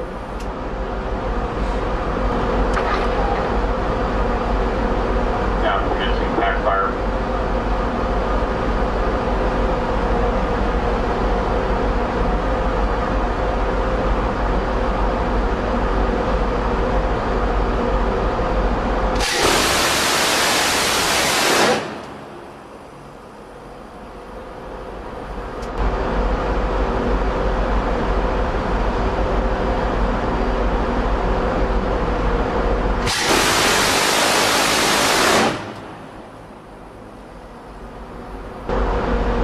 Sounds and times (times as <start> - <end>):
Ship: 0.0 - 39.4.